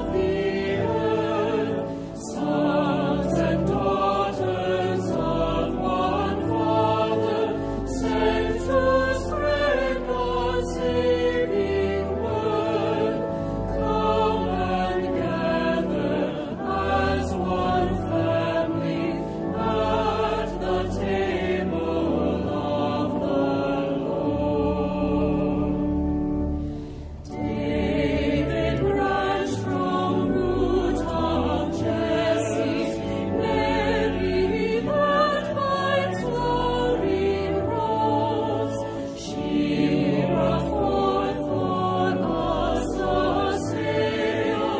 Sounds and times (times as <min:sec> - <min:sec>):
Music: 0:00.0 - 0:44.7.